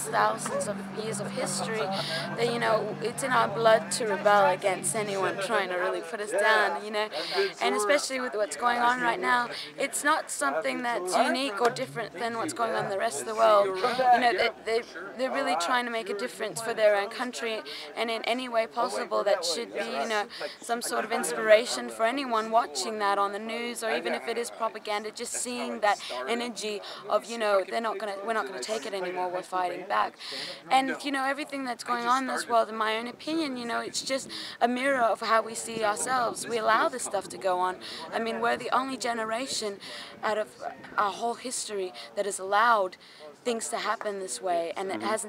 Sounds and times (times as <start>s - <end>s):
Speech: 0.0s - 45.2s.